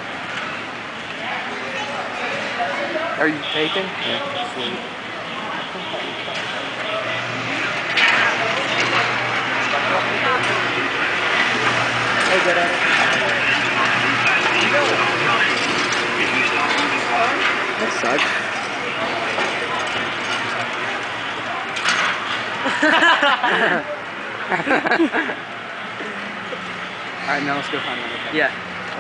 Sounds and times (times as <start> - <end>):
Vehicle: 0.0 - 29.0
Speech: 8.4 - 19.8.